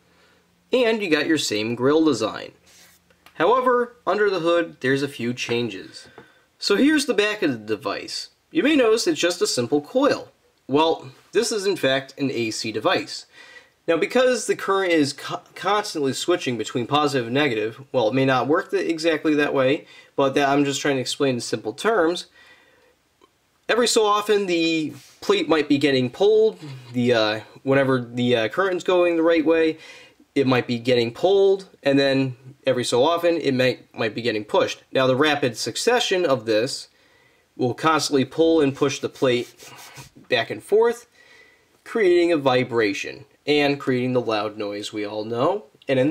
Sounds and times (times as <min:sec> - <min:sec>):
Speech: 0:00.7 - 0:02.6, 0:03.3 - 0:22.3, 0:23.7 - 0:36.9, 0:37.6 - 0:41.1, 0:41.8 - 0:46.1.